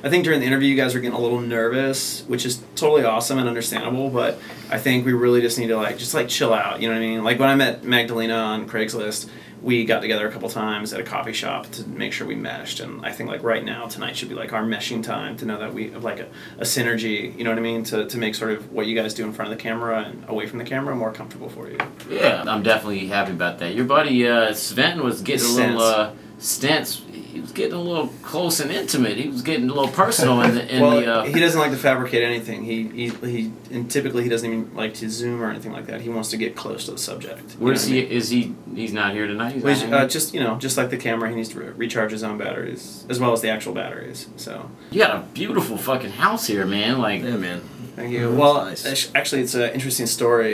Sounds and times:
Speech: 0:00.0 - 0:50.5.

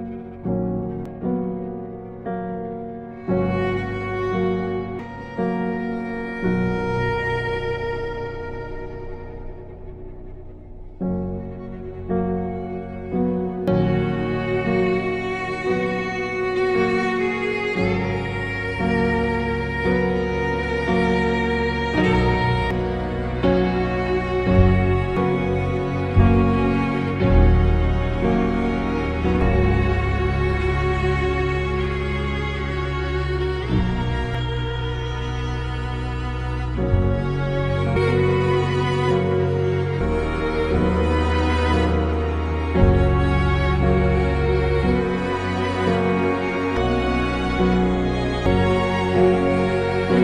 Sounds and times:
Tender music: 0:00.0 - 0:50.2.

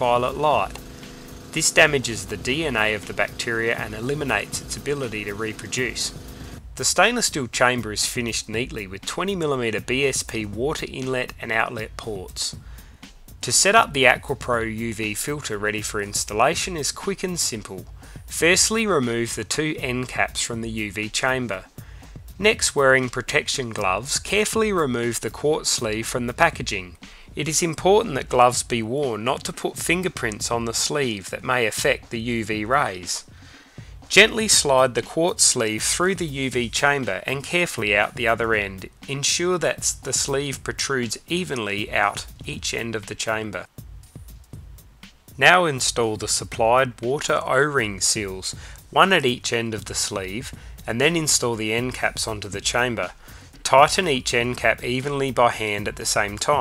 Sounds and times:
Speech: 0:00.0 - 0:00.8, 0:01.5 - 0:06.2, 0:06.8 - 0:12.6, 0:13.4 - 0:21.7, 0:22.4 - 0:33.3, 0:34.1 - 0:43.7, 0:45.4 - 0:56.6
Music: 0:00.0 - 0:56.6.

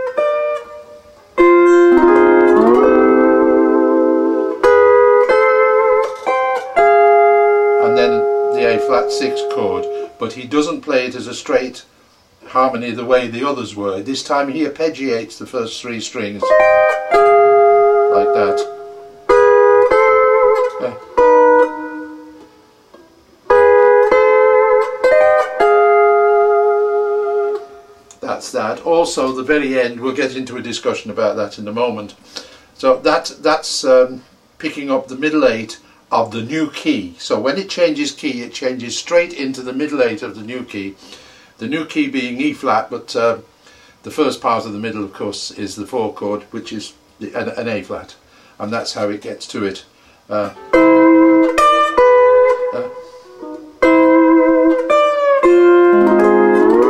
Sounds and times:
Electronic organ: 0:01.4 - 0:10.6, 0:16.2 - 0:22.6, 0:23.5 - 0:28.9, 0:50.4 - 0:56.9
Speech: 0:07.8 - 0:16.6, 0:18.1 - 0:18.7, 0:20.8 - 0:21.0, 0:28.1 - 0:32.2, 0:32.8 - 0:41.0, 0:41.6 - 0:50.6, 0:52.7 - 0:53.0.

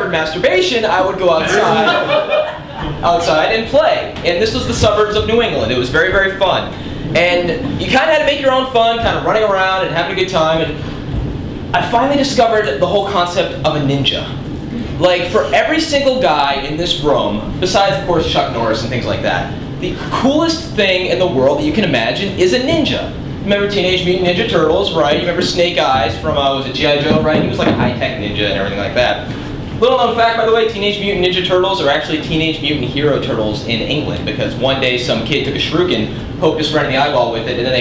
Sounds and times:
Speech: 0:00.0 - 0:02.2, 0:03.0 - 0:10.8, 0:11.8 - 0:37.8.

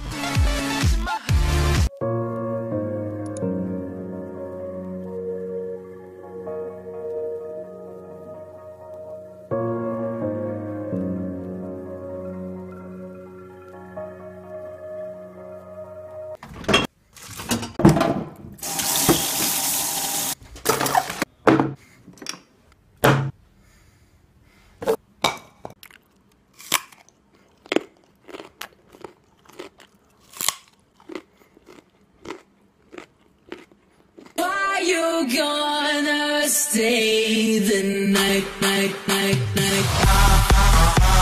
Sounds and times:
Chewing, mastication: 0:25.7 - 0:34.5
Crunch: 0:25.8 - 0:34.4.

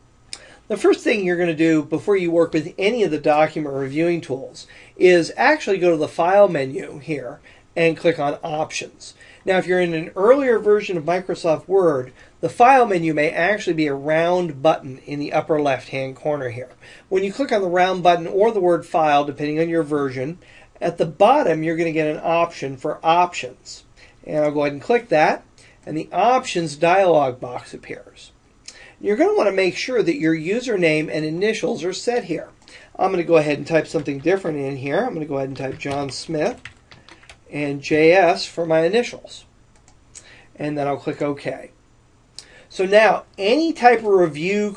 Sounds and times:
Speech: 0:00.7 - 0:28.4, 0:29.0 - 0:36.7, 0:37.5 - 0:39.5, 0:40.6 - 0:41.8, 0:42.7 - 0:44.7.

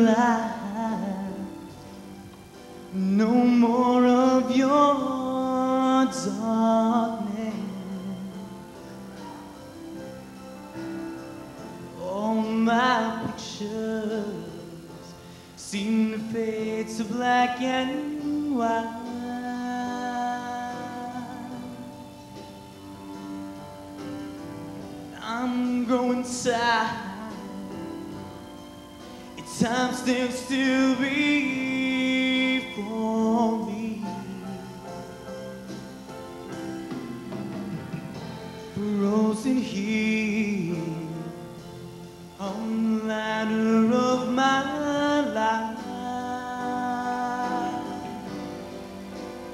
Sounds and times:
Gospel music: 0:00.0 - 0:49.5
Vocal music: 0:00.0 - 0:49.5.

